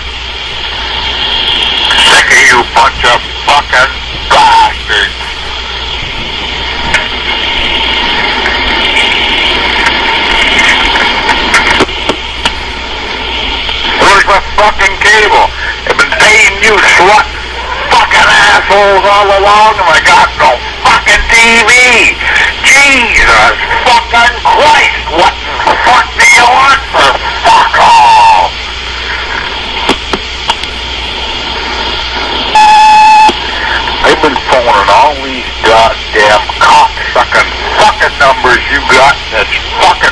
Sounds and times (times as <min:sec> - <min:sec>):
Speech: 0:01.9 - 0:05.2, 0:13.9 - 0:28.5, 0:34.0 - 0:40.1.